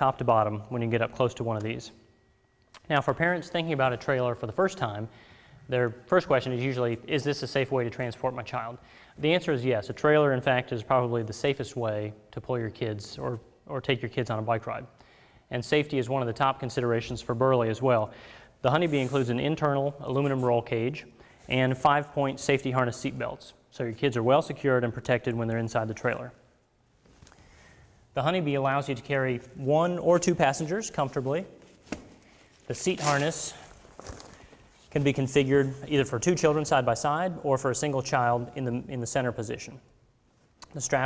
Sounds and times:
Speech: 0.0s - 2.0s, 2.8s - 5.1s, 5.7s - 14.9s, 15.5s - 26.4s, 28.2s - 31.6s, 32.7s - 33.7s, 34.9s - 39.9s, 40.6s - 41.0s.

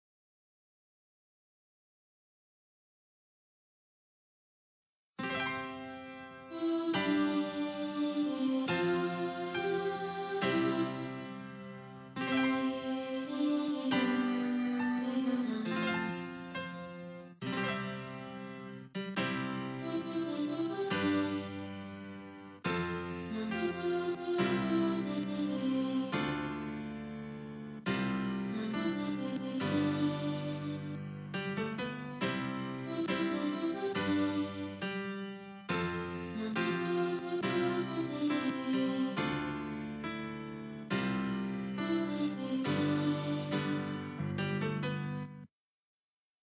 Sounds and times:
Music: 5.2s - 45.5s.

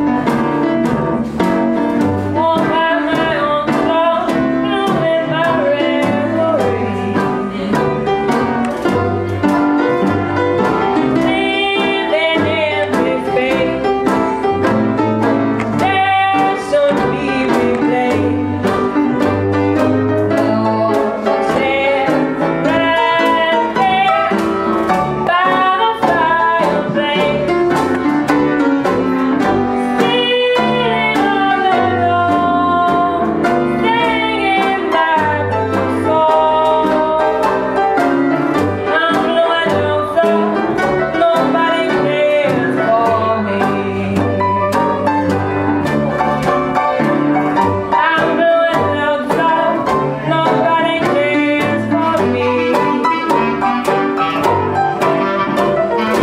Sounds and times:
Music: 0.0s - 56.2s.

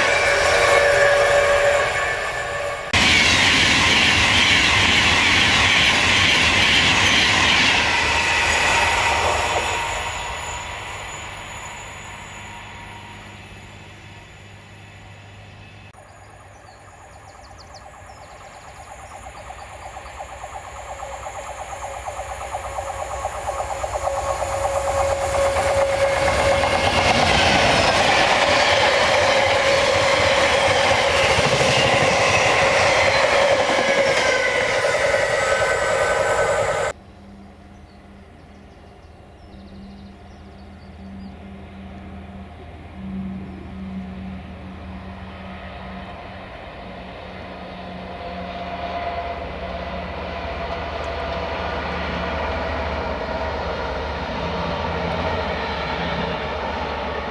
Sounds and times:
Railroad car, train wagon: 0.0s - 57.3s
Train: 0.0s - 57.3s.

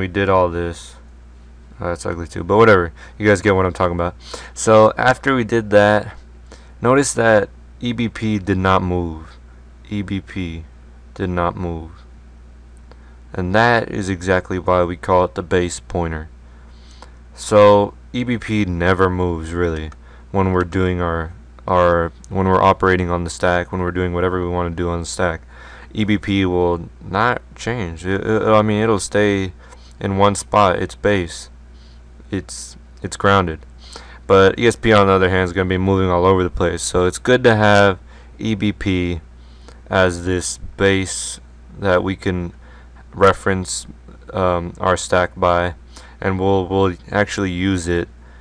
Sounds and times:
Speech: 0.0s - 1.0s, 1.8s - 6.2s, 6.8s - 12.1s, 13.3s - 16.3s, 17.4s - 31.6s, 32.3s - 33.6s, 34.3s - 39.2s, 39.9s - 48.1s.

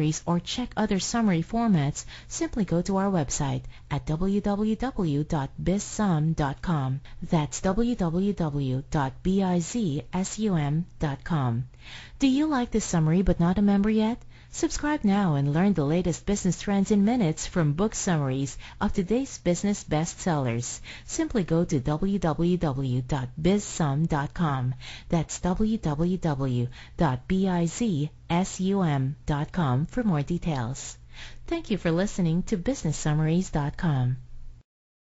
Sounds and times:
Speech: 0.0s - 34.3s.

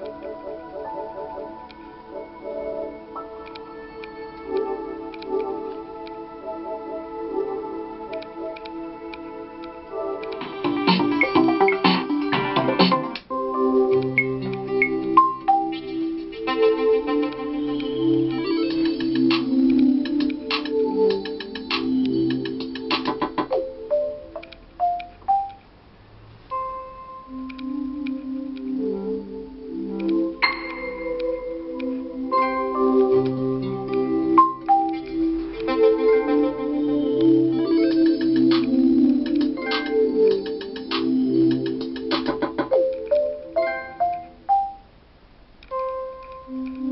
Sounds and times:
Music: 0.0s - 25.7s, 26.5s - 45.0s, 45.6s - 46.9s.

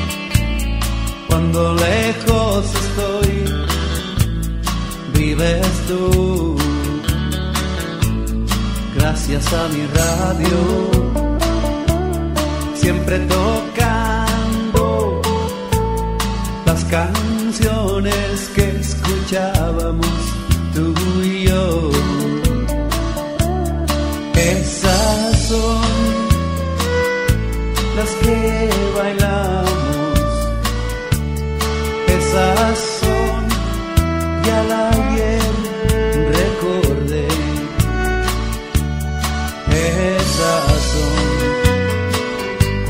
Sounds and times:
Music: 0.0s - 42.8s.

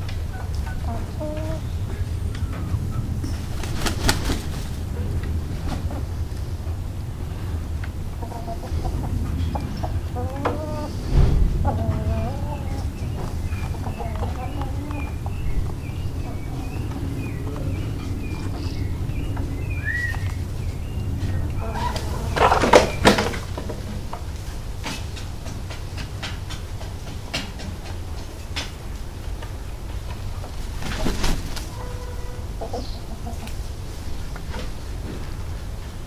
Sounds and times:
Bird: 8.2s - 23.6s, 30.8s - 33.5s.

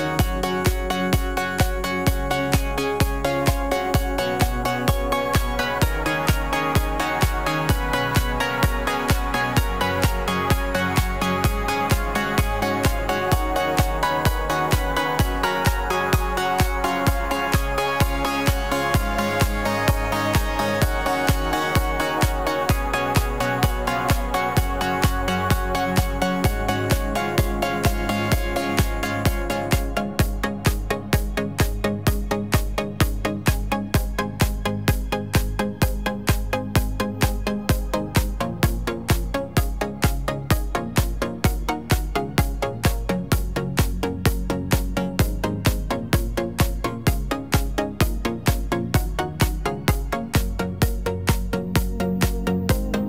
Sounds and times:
Music: 0.0s - 53.0s.

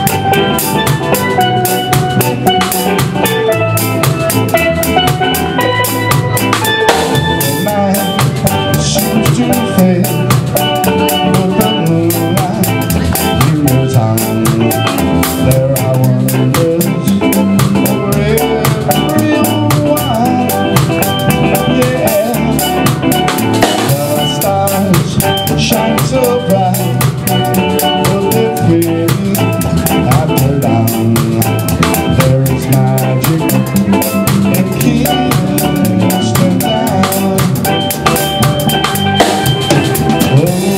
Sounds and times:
Bass drum: 0.0s - 40.7s
Drum kit: 0.0s - 40.7s.

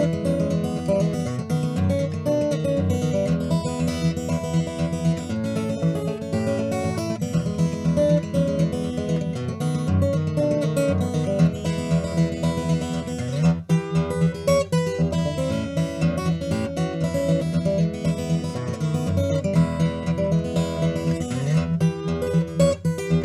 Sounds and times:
Acoustic guitar: 0.0s - 23.2s
Inside, small room: 0.0s - 23.2s.

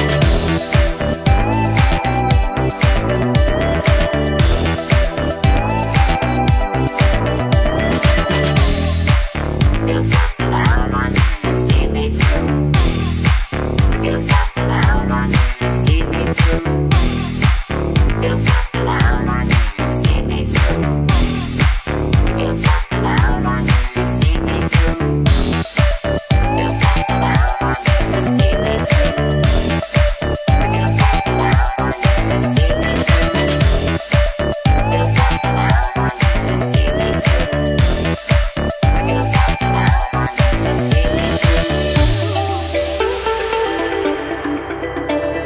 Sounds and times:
Music: 0.0s - 45.4s.

